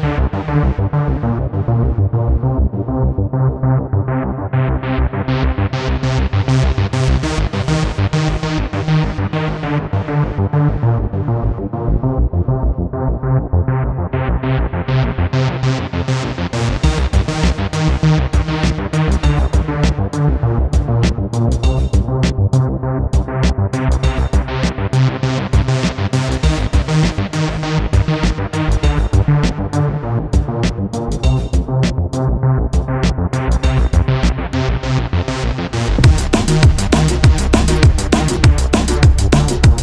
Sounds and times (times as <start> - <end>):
Music: 0.0 - 39.8.